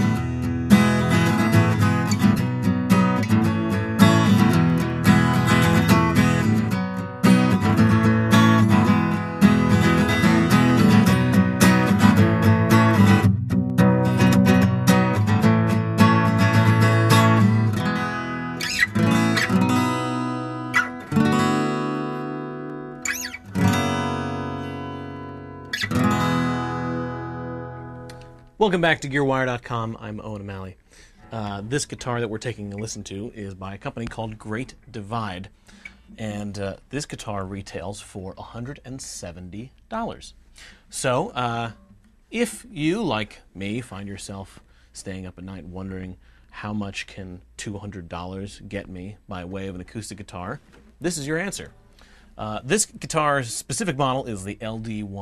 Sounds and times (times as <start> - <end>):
Strum: 0.0 - 36.6.